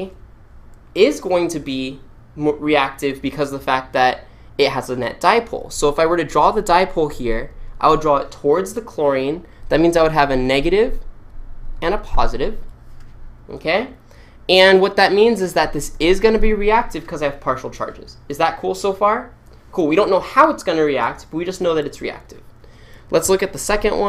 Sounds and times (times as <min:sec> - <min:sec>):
Speech: 0:00.0 - 0:00.2, 0:01.0 - 0:11.1, 0:11.8 - 0:12.7, 0:13.5 - 0:22.5, 0:23.1 - 0:24.0.